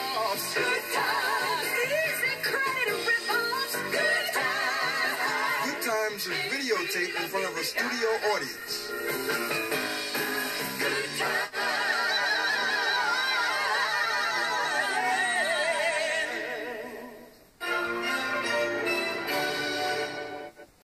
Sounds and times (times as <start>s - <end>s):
Music: 0.0s - 20.8s
Television: 0.0s - 20.8s.